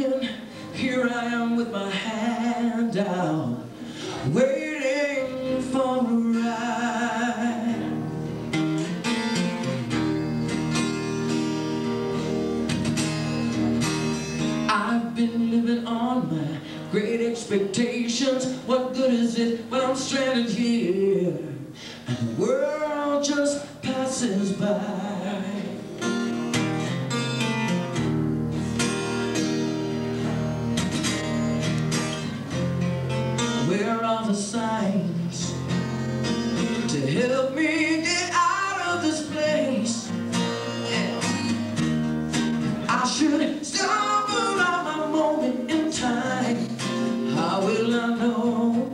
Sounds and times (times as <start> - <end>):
Music: 0.0 - 48.9.